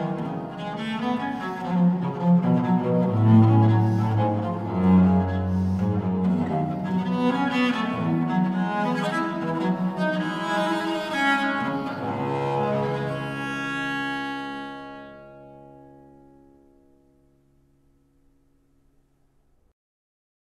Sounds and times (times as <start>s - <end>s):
String section: 0.0s - 16.8s.